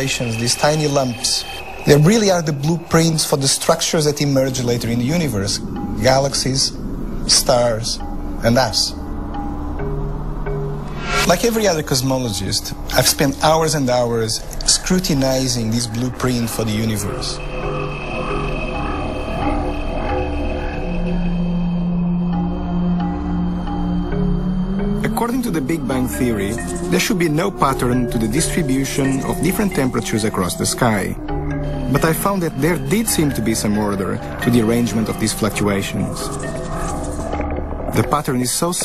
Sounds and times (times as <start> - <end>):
Speech: 0.0 - 9.0, 11.2 - 17.4, 25.0 - 31.2, 31.9 - 36.4, 37.9 - 38.8
Music: 0.0 - 38.8.